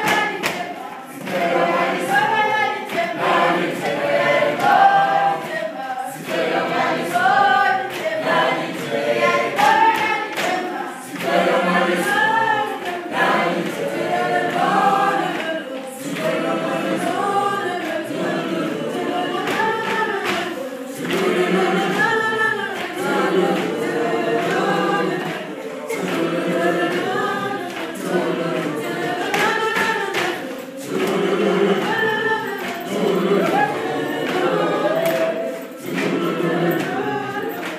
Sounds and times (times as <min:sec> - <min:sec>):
Choir: 0:00.0 - 0:37.7.